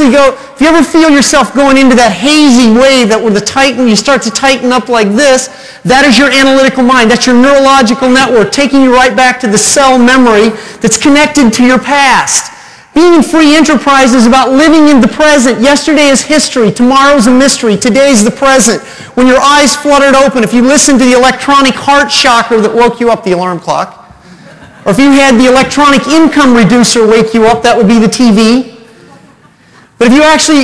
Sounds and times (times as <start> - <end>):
Speech: 0.0 - 24.0, 24.9 - 28.8, 30.0 - 30.6.